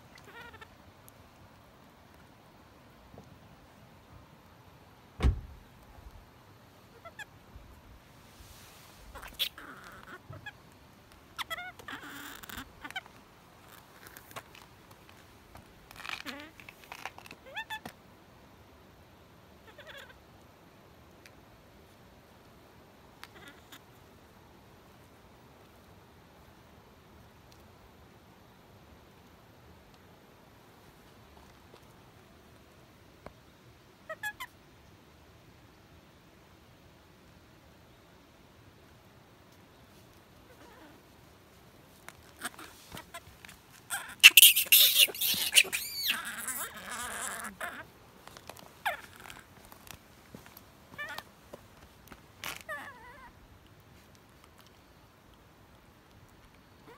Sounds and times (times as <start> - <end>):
Outside, rural or natural: 0.0 - 56.9.